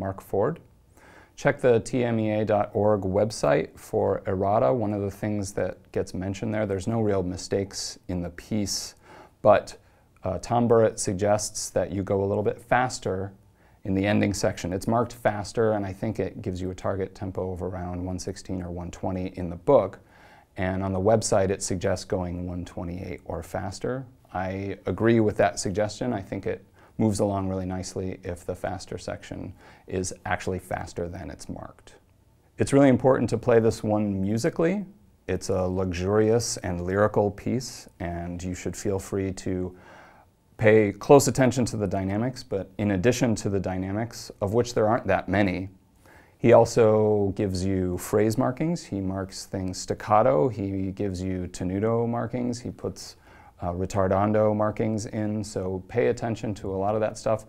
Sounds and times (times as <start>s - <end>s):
Speech: 0.0s - 0.7s, 1.4s - 39.8s, 40.6s - 45.8s, 46.4s - 57.4s.